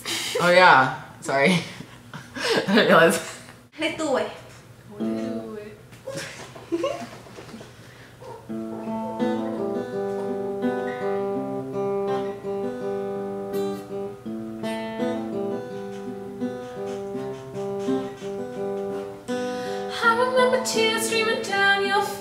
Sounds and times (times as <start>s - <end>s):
Music: 8.5s - 22.2s.